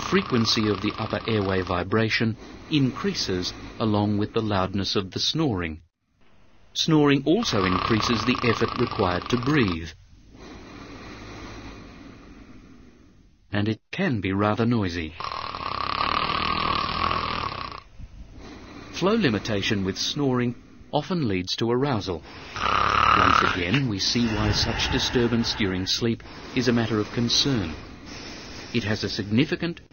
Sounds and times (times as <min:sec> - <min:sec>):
Snoring: 0:00.0 - 0:01.9, 0:07.4 - 0:09.8, 0:10.4 - 0:13.0, 0:15.2 - 0:19.8, 0:22.4 - 0:29.1
Speech: 0:00.0 - 0:05.8, 0:06.8 - 0:10.0, 0:13.5 - 0:15.2, 0:19.0 - 0:22.3, 0:23.1 - 0:27.8, 0:28.7 - 0:29.9.